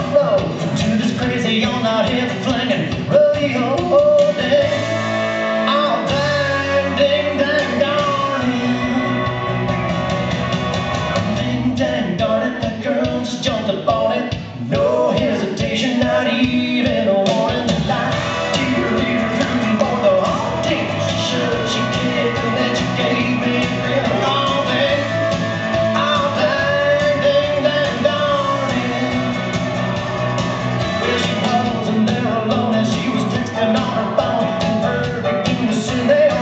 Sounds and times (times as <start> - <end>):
Music: 0.0 - 36.4.